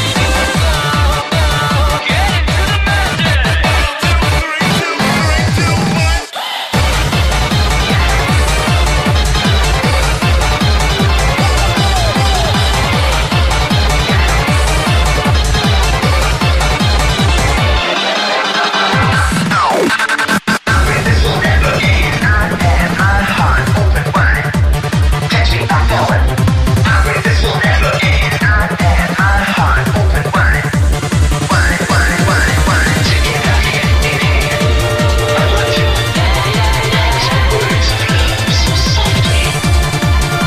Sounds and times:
Music: 0.0s - 40.4s.

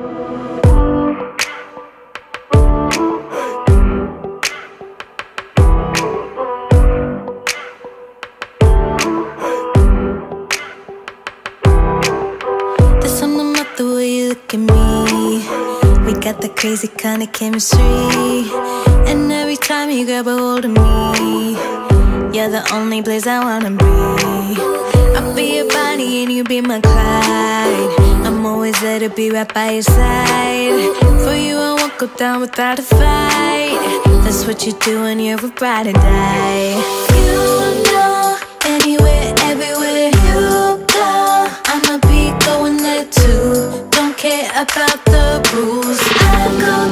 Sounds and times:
Independent music: 0.0s - 46.9s.

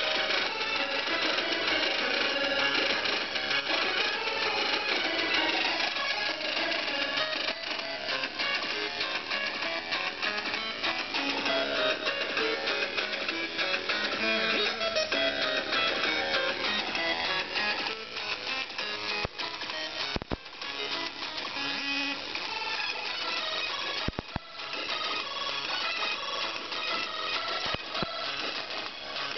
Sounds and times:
Music: 0.0s - 29.3s.

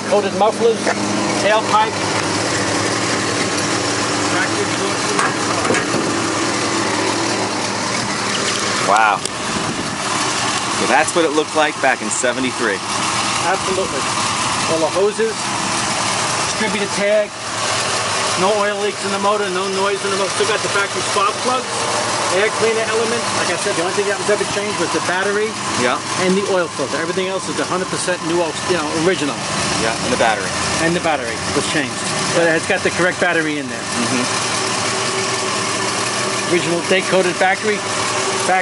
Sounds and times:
Speech: 0.0s - 2.0s, 8.9s - 9.3s, 10.8s - 12.8s, 13.4s - 14.0s, 16.5s - 17.3s, 18.4s - 21.7s, 22.3s - 34.3s, 36.5s - 37.8s
Car: 0.0s - 38.6s
Outside, urban or manmade: 0.0s - 38.6s.

